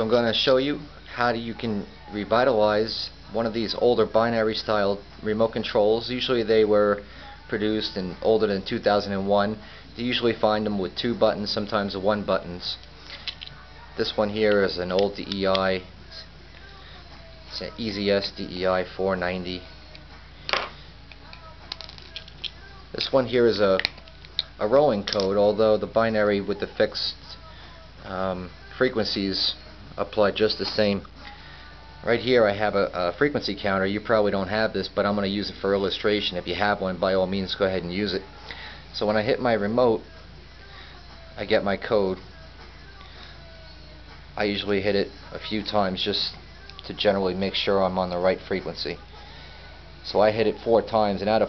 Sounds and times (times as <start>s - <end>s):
Speech: 0.0s - 12.8s, 14.0s - 16.3s, 17.5s - 19.7s, 24.6s - 27.2s, 28.0s - 31.1s, 32.0s - 38.2s, 41.4s - 42.2s, 44.4s - 49.0s, 50.0s - 51.4s
Inside, small room: 0.0s - 51.4s
Music: 0.0s - 51.4s.